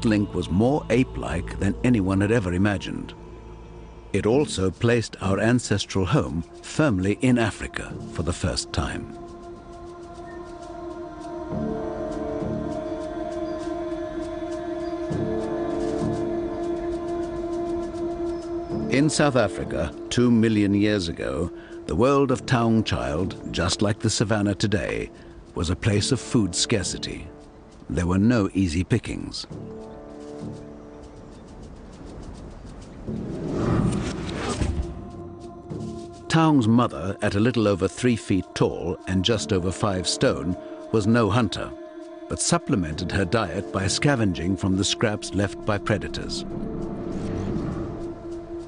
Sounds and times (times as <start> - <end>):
Speech: 0.0 - 3.1, 4.2 - 9.2, 18.9 - 27.3, 27.9 - 29.5, 36.3 - 46.4
Music: 0.0 - 48.6
Outside, rural or natural: 0.0 - 48.6.